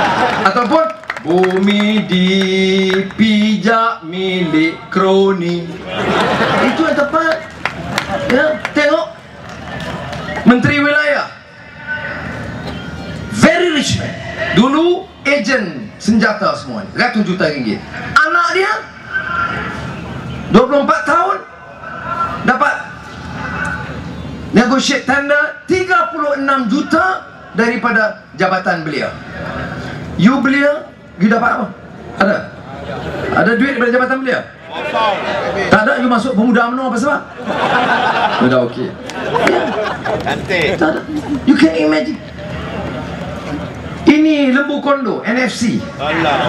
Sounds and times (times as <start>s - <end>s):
Male speech, man speaking: 0.4s - 5.8s, 6.6s - 7.5s, 8.3s - 9.2s, 10.5s - 12.4s, 13.3s - 19.8s, 20.5s - 23.9s, 24.5s - 29.2s, 30.2s - 32.6s, 33.3s - 37.3s, 38.4s - 39.0s, 40.3s - 42.2s, 44.1s - 46.4s
Narration, monologue: 0.4s - 7.7s, 8.3s - 9.4s, 13.3s - 19.1s, 22.4s - 29.4s, 30.0s - 32.7s, 33.3s - 34.6s, 35.7s - 39.1s.